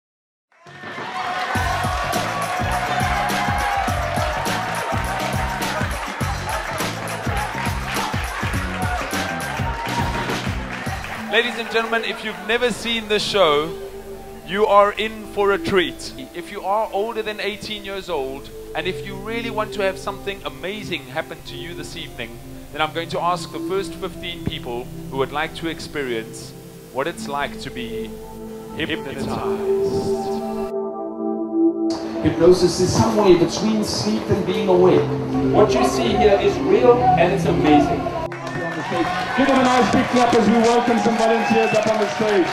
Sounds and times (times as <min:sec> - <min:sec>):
Music: 0:00.5 - 0:42.5
Speech: 0:11.3 - 0:13.8, 0:14.5 - 0:28.1, 0:28.8 - 0:30.5, 0:32.2 - 0:42.5.